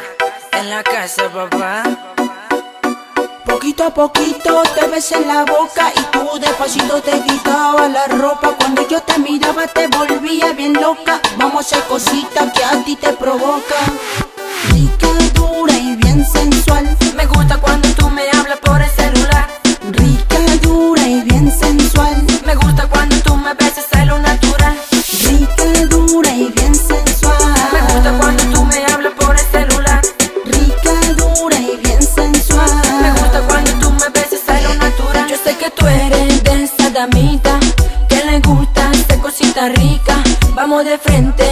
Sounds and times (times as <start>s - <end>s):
Music: 0.0s - 41.5s.